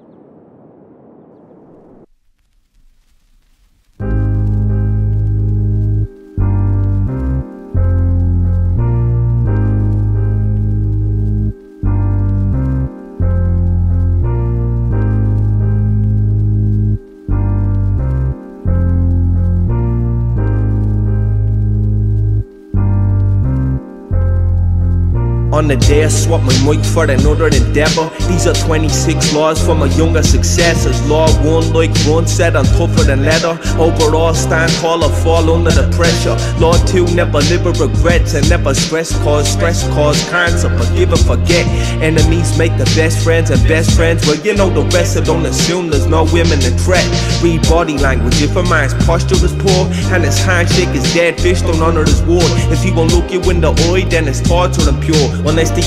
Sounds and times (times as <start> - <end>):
Music: 3.8 - 55.8.